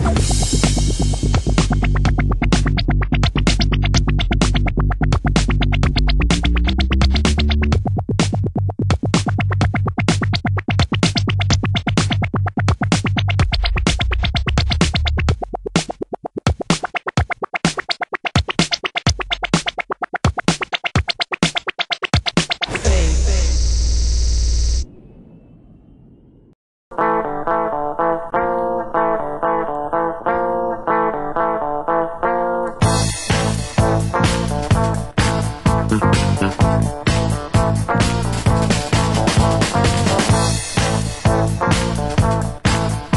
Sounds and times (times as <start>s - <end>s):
Effects unit: 0.0s - 15.7s, 26.9s - 43.1s
Music: 0.0s - 23.6s, 26.9s - 43.1s.